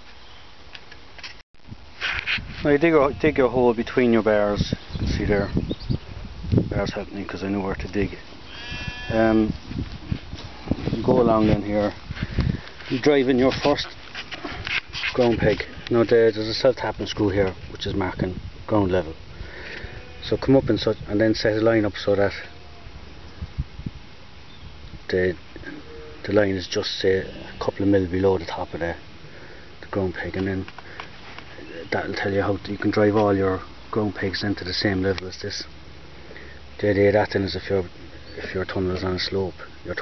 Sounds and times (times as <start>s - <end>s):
Speech: 2.6s - 5.6s, 6.7s - 8.2s, 9.1s - 9.6s, 11.0s - 12.0s, 12.9s - 14.0s, 15.2s - 19.2s, 20.2s - 22.5s, 25.1s - 25.4s, 26.2s - 29.0s, 29.9s - 30.7s, 31.6s - 35.7s, 36.8s - 40.0s
Bleat: 2.8s - 3.6s, 8.5s - 9.4s, 19.8s - 20.5s, 22.3s - 22.9s, 27.2s - 28.9s.